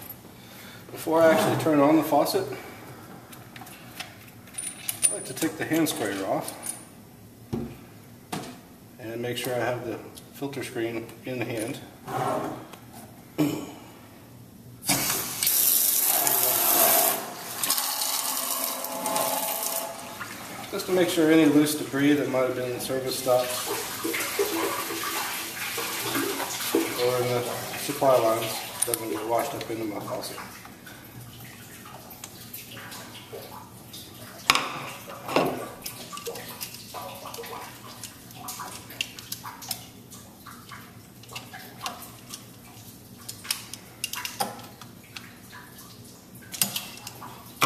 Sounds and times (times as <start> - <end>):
Speech: 0.9 - 2.7, 5.1 - 6.6, 9.0 - 11.9, 20.7 - 23.7, 26.8 - 30.5
Sink (filling or washing): 14.8 - 47.6
Water: 14.9 - 47.6
Water tap, faucet: 14.9 - 47.6.